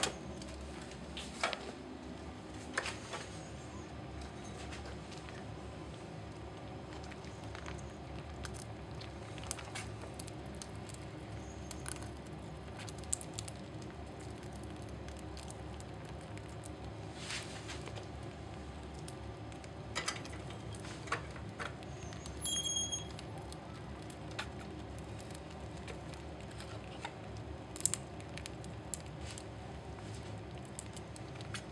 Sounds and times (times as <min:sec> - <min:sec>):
Patter: 0:02.9 - 0:31.7.